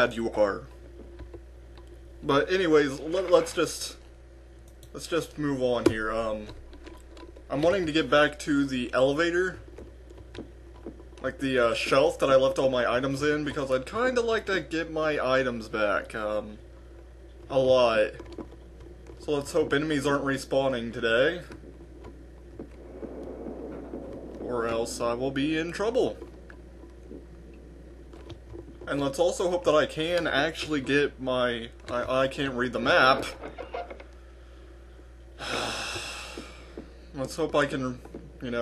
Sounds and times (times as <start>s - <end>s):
Speech: 0.0s - 0.7s, 2.2s - 4.0s, 4.9s - 6.6s, 7.5s - 9.6s, 11.2s - 16.6s, 17.5s - 18.2s, 19.2s - 21.5s, 24.4s - 26.2s, 28.9s - 33.4s, 37.2s - 38.6s.